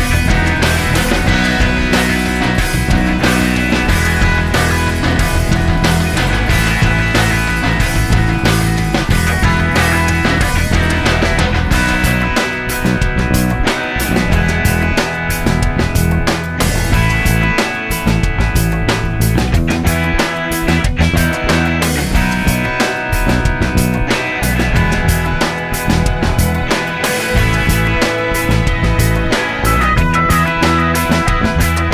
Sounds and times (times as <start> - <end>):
Music: 0.0 - 31.9.